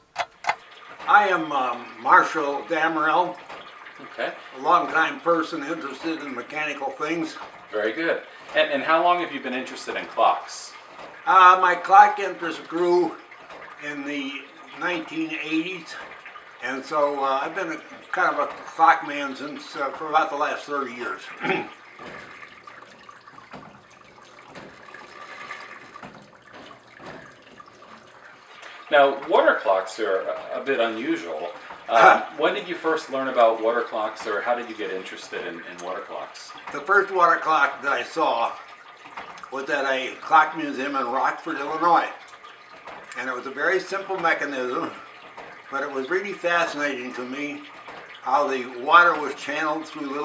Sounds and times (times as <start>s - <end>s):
Speech: 1.1s - 3.4s, 4.0s - 13.2s, 13.8s - 21.7s, 28.9s - 38.6s, 39.5s - 42.2s, 43.2s - 45.0s, 45.7s - 50.2s.